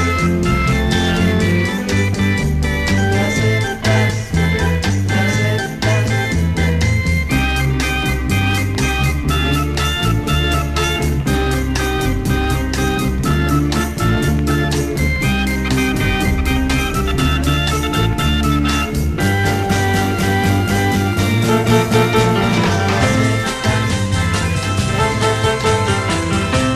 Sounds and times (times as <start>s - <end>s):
Music: 0.0s - 26.7s.